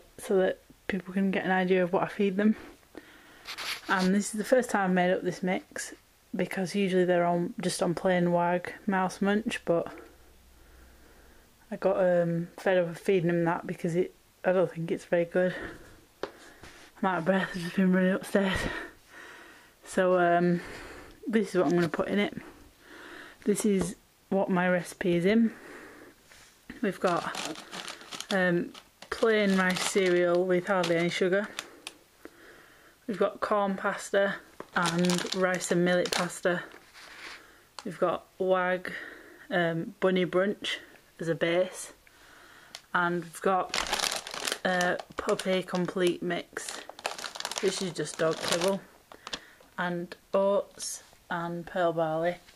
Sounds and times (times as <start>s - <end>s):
Speech: 0.2s - 2.7s, 3.9s - 10.1s, 11.7s - 15.8s, 17.0s - 18.9s, 19.9s - 20.7s, 21.3s - 22.5s, 23.4s - 25.6s, 26.7s - 27.6s, 28.3s - 31.6s, 33.1s - 36.7s, 37.8s - 42.0s, 42.9s - 43.8s, 44.6s - 46.9s, 47.6s - 48.9s, 49.8s - 52.5s.